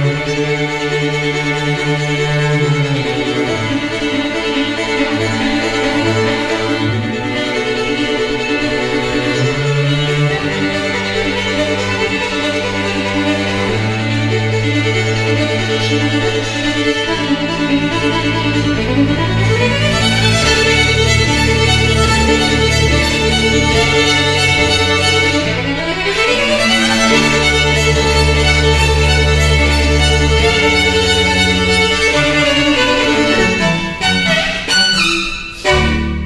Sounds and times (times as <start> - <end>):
String section: 0.0 - 36.2.